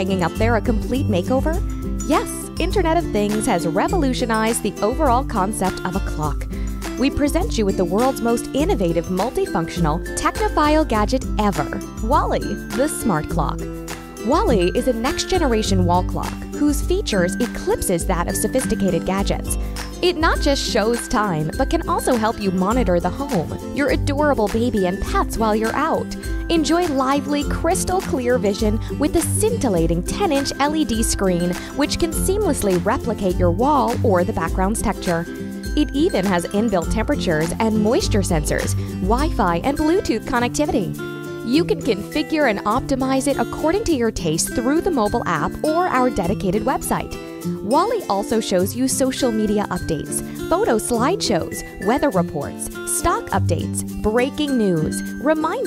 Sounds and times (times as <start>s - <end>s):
Speech: 0.0s - 13.6s, 14.2s - 55.6s
Music: 0.0s - 55.6s.